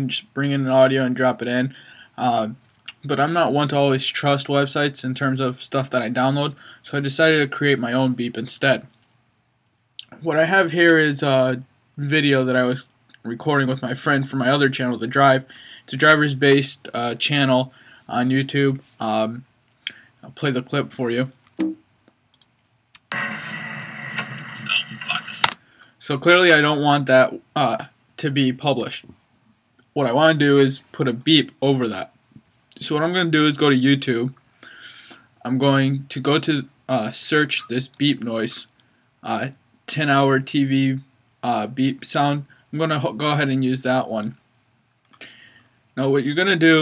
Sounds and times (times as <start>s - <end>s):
Speech: 0.0s - 8.9s, 10.0s - 19.5s, 20.2s - 21.4s, 24.7s - 29.2s, 30.0s - 32.1s, 32.8s - 34.4s, 35.4s - 44.4s, 46.0s - 46.8s.